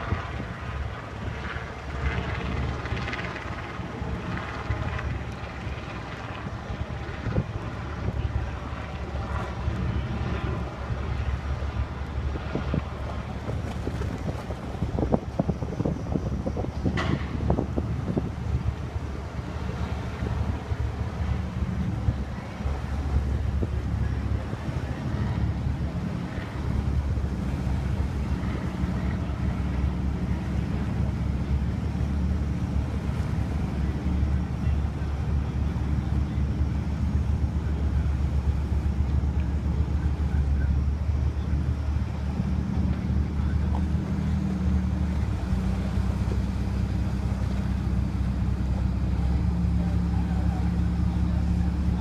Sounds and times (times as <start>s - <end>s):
Ship: 0.0s - 52.0s.